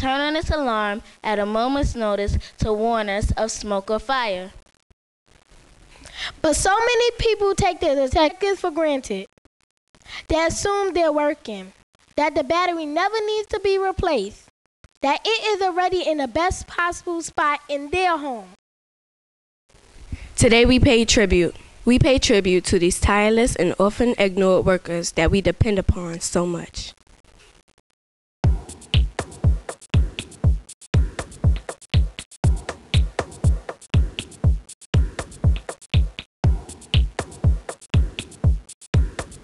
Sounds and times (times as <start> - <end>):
Speech: 0.0 - 4.6, 6.4 - 9.3, 10.3 - 14.4, 15.0 - 18.6, 20.4 - 26.9
Music: 28.5 - 39.4.